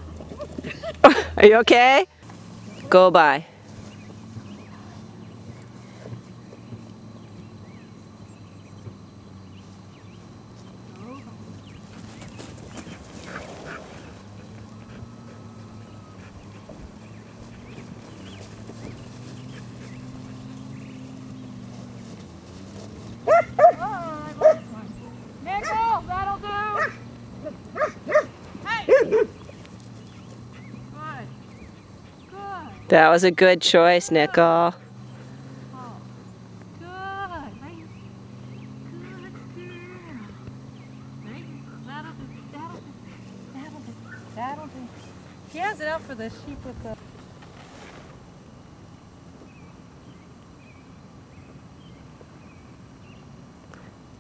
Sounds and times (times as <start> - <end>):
Bow-wow: 23.3 - 23.8, 26.8 - 28.3, 28.9 - 29.4.